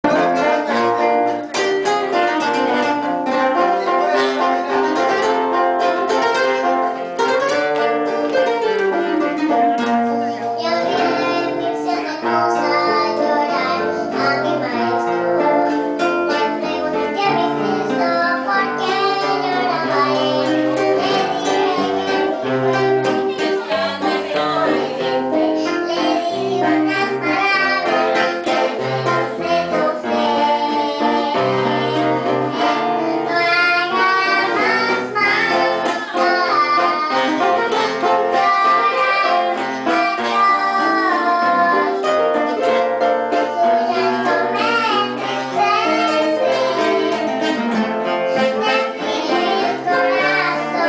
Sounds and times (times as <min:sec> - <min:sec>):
Pizzicato: 0:00.0 - 0:50.8.